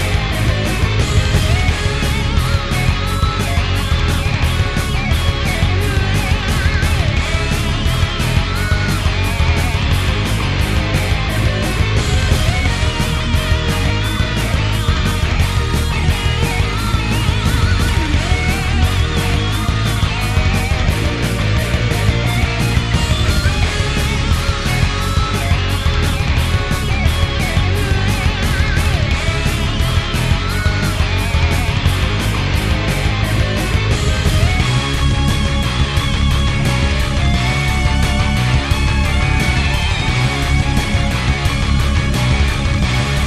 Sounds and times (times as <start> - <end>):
Soundtrack music: 0.0 - 43.2.